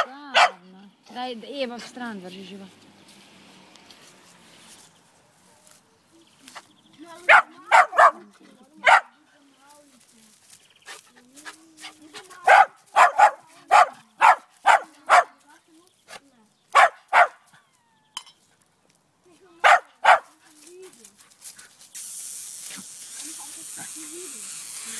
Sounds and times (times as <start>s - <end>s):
Bark: 0.0s - 0.6s, 7.3s - 8.2s, 8.8s - 9.1s, 12.5s - 15.3s, 16.8s - 17.4s, 19.6s - 20.3s
Canidae, dogs, wolves: 0.0s - 0.7s, 7.2s - 9.2s, 10.8s - 15.4s, 16.7s - 18.6s, 19.6s - 21.8s.